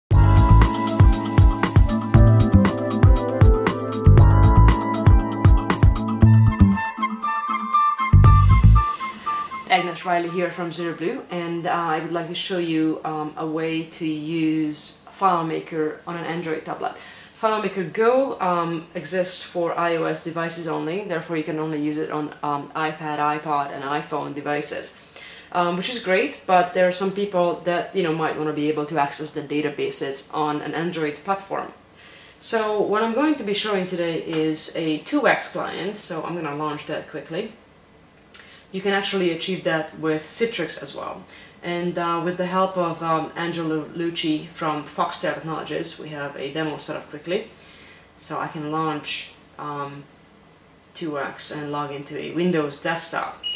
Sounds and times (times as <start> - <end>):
Flute: 0.1 - 2.4, 6.2 - 11.0
Speech: 9.7 - 31.8, 32.4 - 37.6, 38.7 - 47.5, 48.2 - 50.1, 50.9 - 53.5.